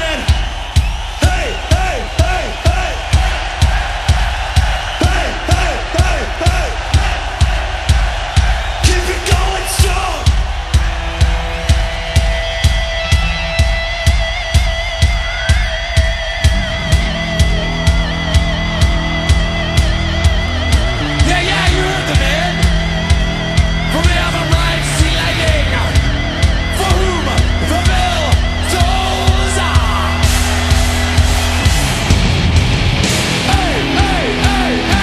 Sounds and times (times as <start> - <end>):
Music: 0.0 - 35.0.